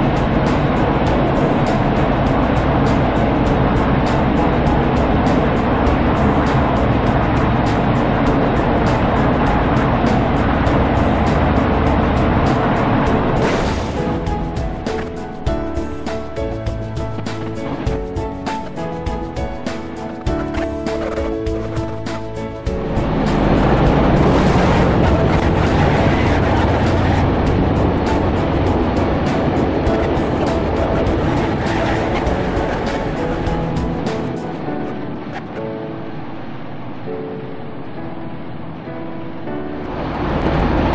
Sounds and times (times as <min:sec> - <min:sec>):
Music: 0:00.0 - 0:40.9.